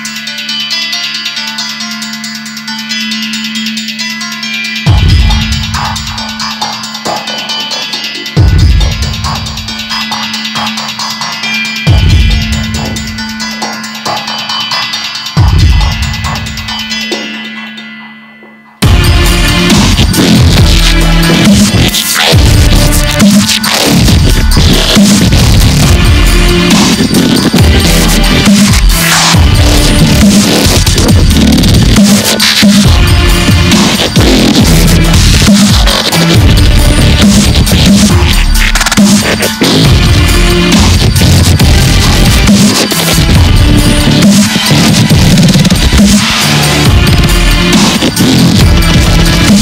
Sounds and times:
Dubstep: 2.6s - 17.8s, 18.8s - 49.6s.

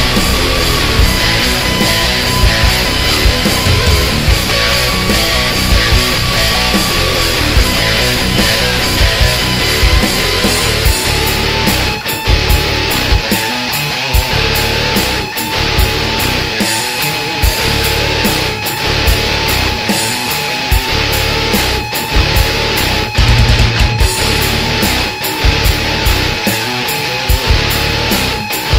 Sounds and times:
Music: 0.0s - 28.7s.

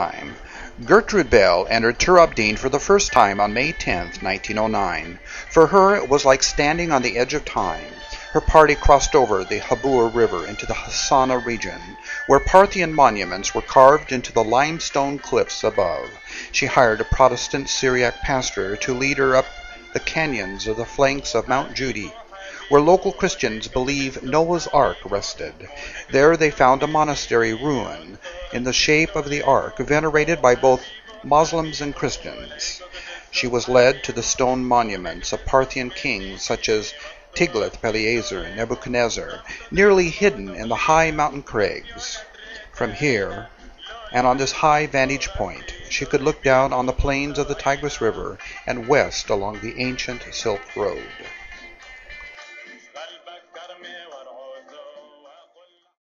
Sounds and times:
Speech: 0.0s - 51.3s.

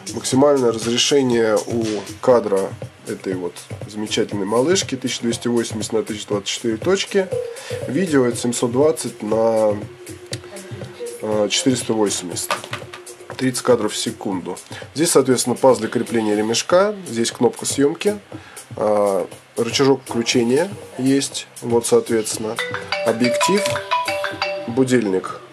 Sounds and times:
Speech: 0.0s - 9.9s, 10.6s - 12.5s, 13.4s - 18.2s, 18.8s - 23.8s, 24.7s - 25.5s
Music: 0.0s - 25.5s.

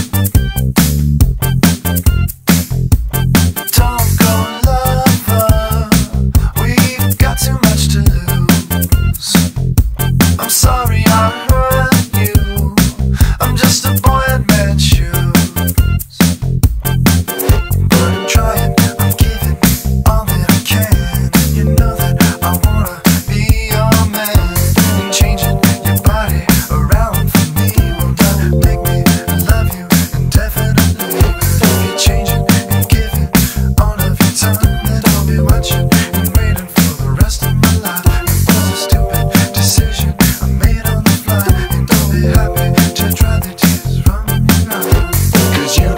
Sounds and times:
Music: 0.0s - 45.9s.

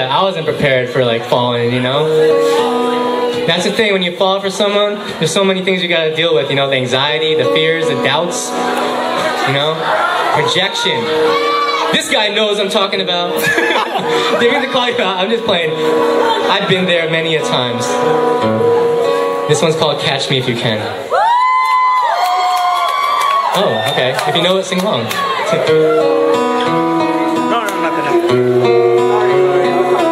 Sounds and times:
Music: 0.0s - 30.1s.

